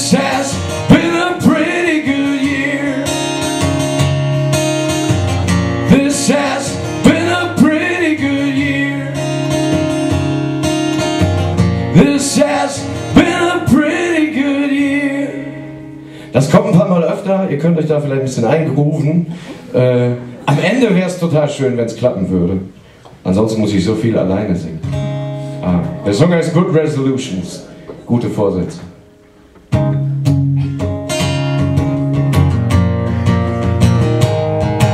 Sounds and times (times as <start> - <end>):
Music: 0.0 - 16.5, 24.8 - 26.3, 28.6 - 34.9
Speech: 16.4 - 24.8, 25.6 - 29.0.